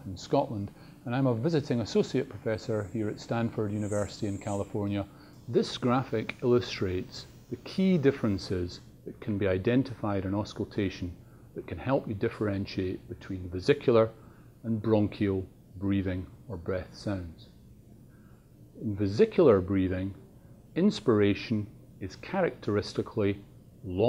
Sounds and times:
Speech: 0.0s - 17.6s, 18.8s - 20.2s, 20.8s - 24.0s.

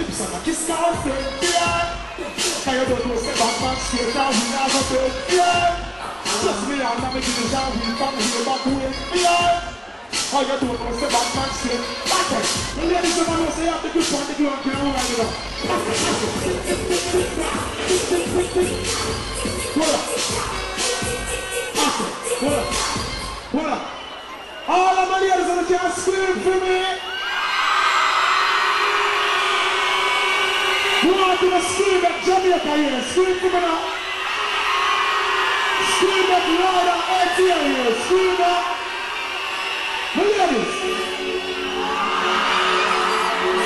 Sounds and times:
Music: 0.0s - 24.4s, 28.3s - 43.6s.

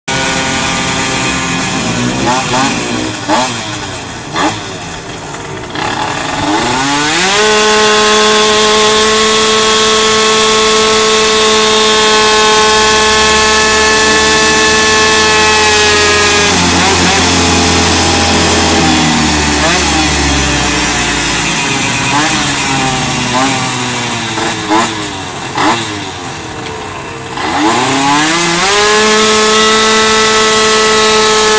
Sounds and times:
Chainsaw: 0.1s - 31.5s
Motorcycle: 0.1s - 31.5s.

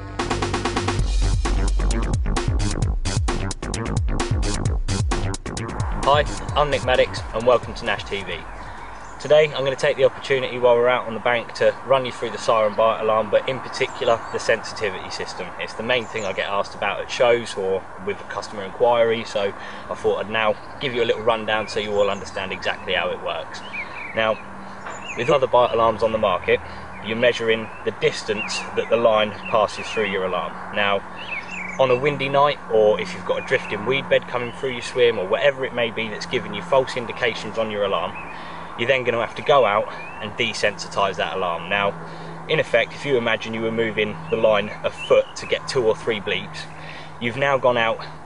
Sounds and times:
Speech: 6.0s - 8.5s, 9.2s - 24.4s, 25.2s - 31.0s, 31.8s - 48.2s.

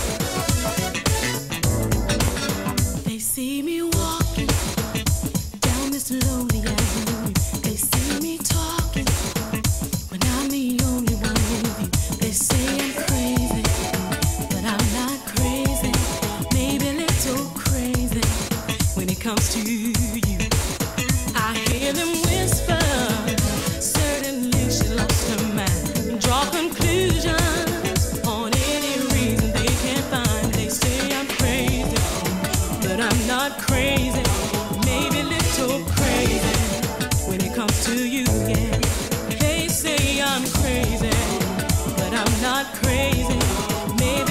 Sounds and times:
Music: 0.0s - 44.3s.

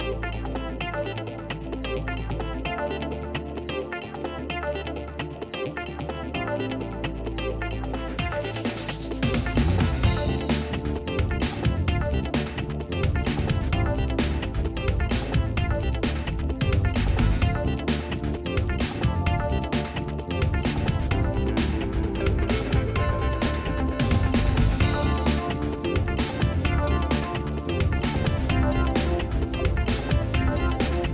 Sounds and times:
Music: 0.0s - 31.1s.

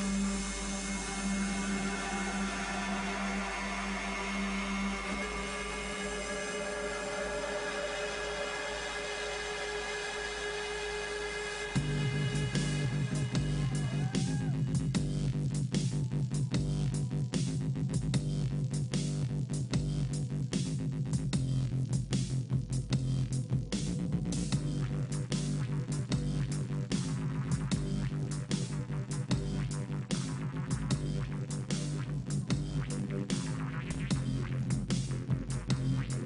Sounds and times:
Music: 0.0s - 36.2s.

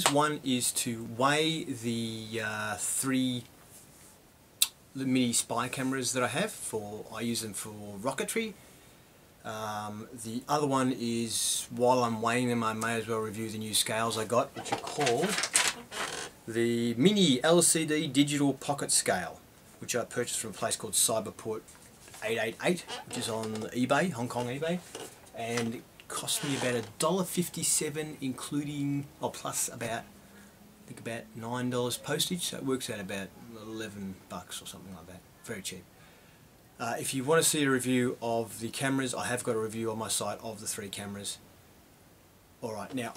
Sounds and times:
Speech: 0.0s - 3.5s, 5.0s - 8.6s, 9.4s - 15.4s, 16.5s - 21.6s, 22.2s - 30.1s, 30.9s - 35.9s, 36.8s - 41.4s, 42.6s - 43.1s.

